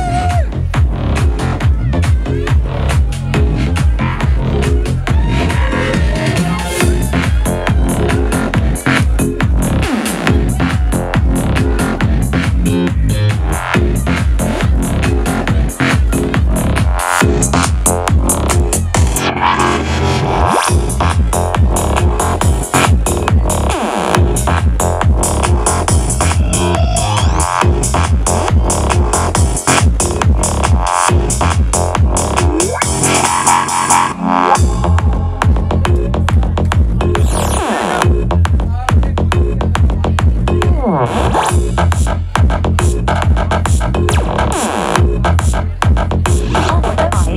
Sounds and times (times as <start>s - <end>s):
Trance music: 0.0s - 47.3s
Speech: 1.2s - 9.4s, 26.1s - 27.5s, 34.7s - 42.3s, 45.1s - 47.3s.